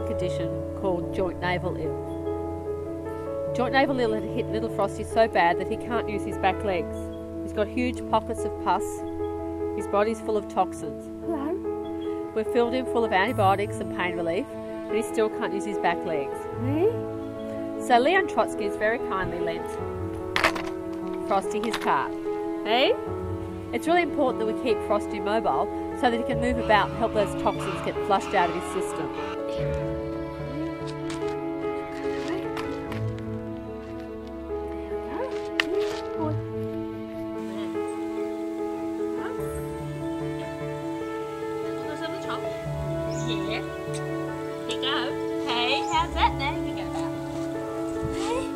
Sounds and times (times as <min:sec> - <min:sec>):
Music: 0:00.0 - 0:48.5.